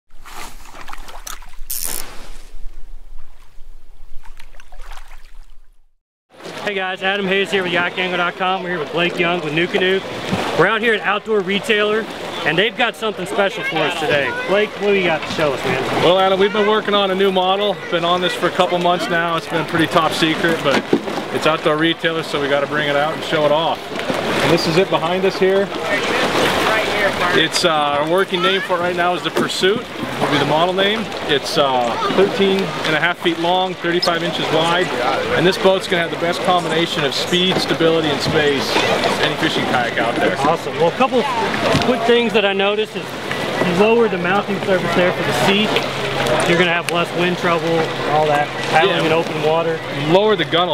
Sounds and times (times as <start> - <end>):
Rowboat, canoe, kayak: 0.1 - 50.7.